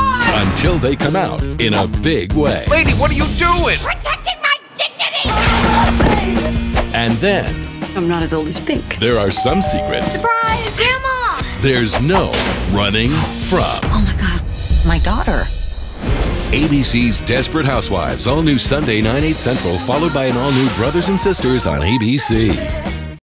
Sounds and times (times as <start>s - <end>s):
Music: 0.0s - 4.4s, 5.2s - 23.2s
Speech: 0.0s - 5.6s, 7.0s - 11.0s, 11.6s - 15.5s, 16.5s - 22.8s.